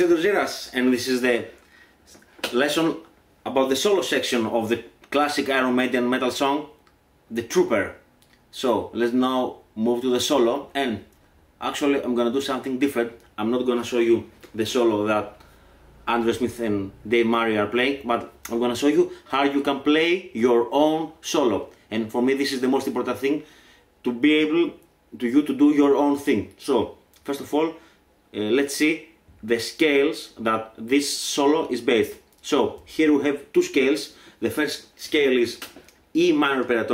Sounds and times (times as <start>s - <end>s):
Speech: 0.0s - 15.4s, 16.0s - 36.9s.